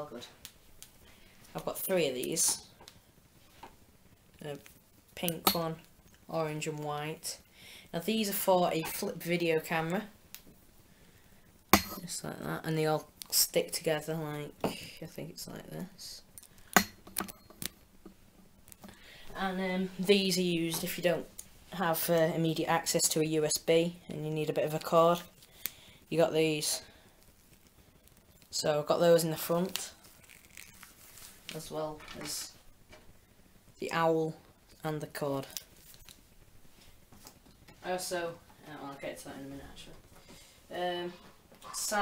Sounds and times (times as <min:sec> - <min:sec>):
Speech: 0:00.0 - 0:00.4, 0:01.5 - 0:02.7, 0:04.4 - 0:04.6, 0:05.2 - 0:07.4, 0:08.0 - 0:10.1, 0:11.9 - 0:16.2, 0:19.3 - 0:25.3, 0:26.1 - 0:26.8, 0:28.5 - 0:30.0, 0:31.5 - 0:32.6, 0:33.8 - 0:35.6, 0:37.8 - 0:40.0, 0:40.7 - 0:42.0
Inside, small room: 0:00.0 - 0:42.0.